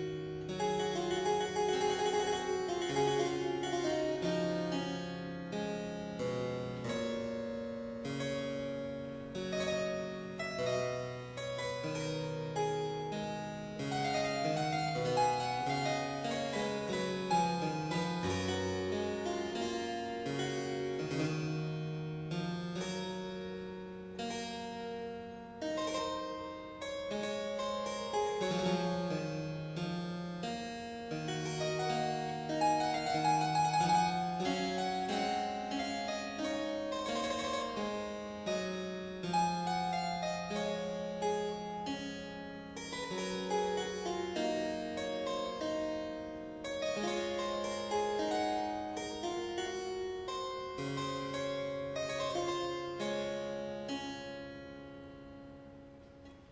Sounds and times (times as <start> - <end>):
Harpsichord: 0.0 - 56.5.